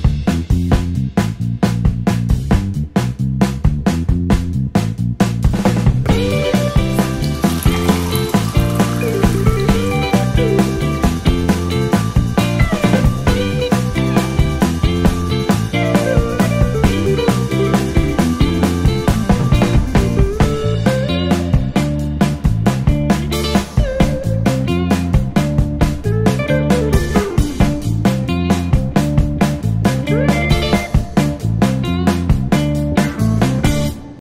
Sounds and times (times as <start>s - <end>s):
Music: 0.0s - 34.2s.